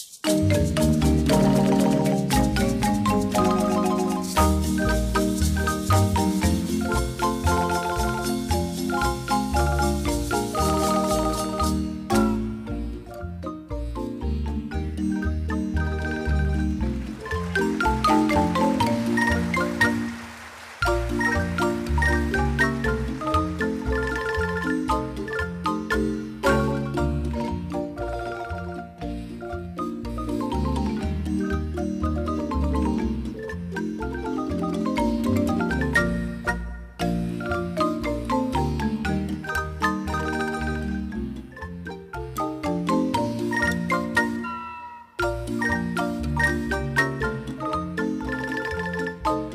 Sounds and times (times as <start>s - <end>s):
Glockenspiel: 0.0s - 49.5s
Marimba, xylophone: 0.0s - 49.5s.